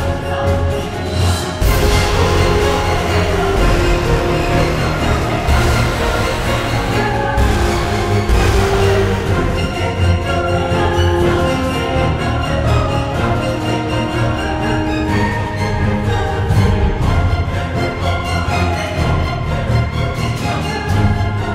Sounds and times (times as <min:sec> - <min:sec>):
Exciting music: 0:00.0 - 0:21.5.